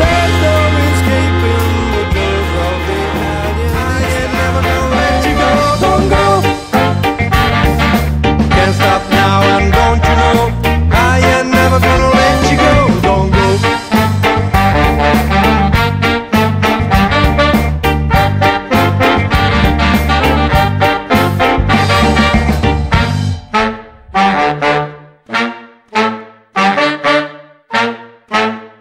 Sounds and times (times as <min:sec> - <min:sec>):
Swing music: 0:00.0 - 0:28.8
Trumpet: 0:00.0 - 0:28.8.